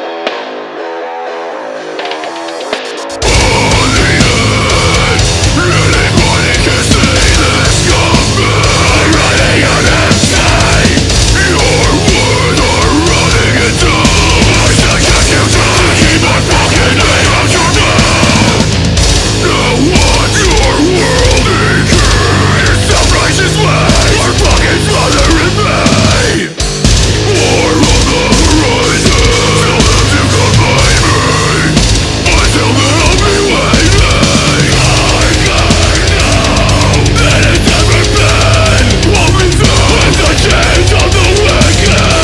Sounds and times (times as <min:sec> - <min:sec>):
Music: 0:00.0 - 0:42.2.